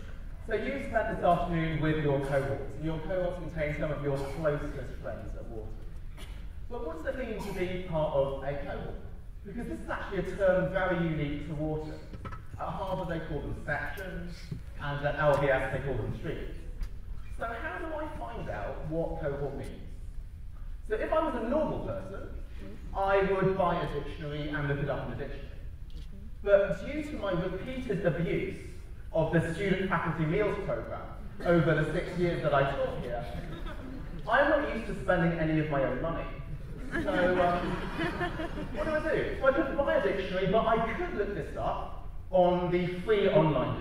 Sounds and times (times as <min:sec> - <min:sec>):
Male speech, man speaking: 0:00.5 - 0:05.8, 0:06.7 - 0:16.7, 0:17.4 - 0:20.0, 0:20.9 - 0:25.6, 0:26.4 - 0:33.5, 0:34.2 - 0:37.8, 0:38.6 - 0:43.8.